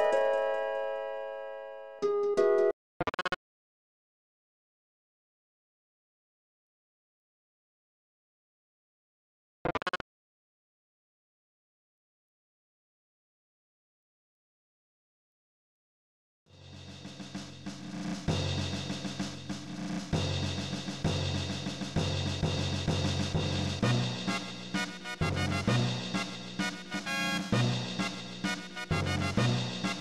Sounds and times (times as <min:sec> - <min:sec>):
Music: 0:00.0 - 0:02.7, 0:16.5 - 0:30.0.